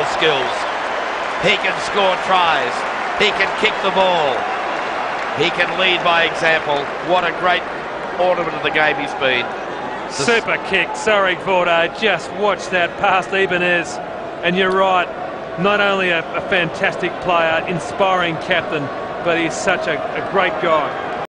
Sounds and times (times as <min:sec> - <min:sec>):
Speech: 0:00.0 - 0:00.7, 0:01.4 - 0:04.4, 0:05.4 - 0:07.6, 0:08.2 - 0:09.5, 0:10.1 - 0:21.0.